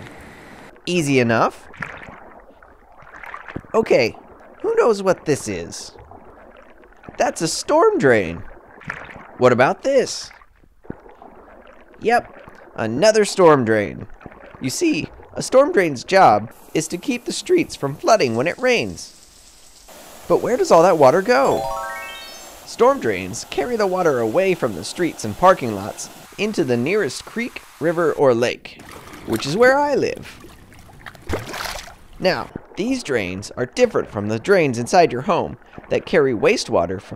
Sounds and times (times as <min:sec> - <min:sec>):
Water: 0:00.0 - 0:37.1
Speech: 0:00.9 - 0:01.6, 0:03.8 - 0:06.0, 0:07.2 - 0:08.5, 0:09.4 - 0:10.4, 0:12.0 - 0:19.1, 0:20.3 - 0:21.7, 0:22.7 - 0:30.3, 0:32.2 - 0:37.1.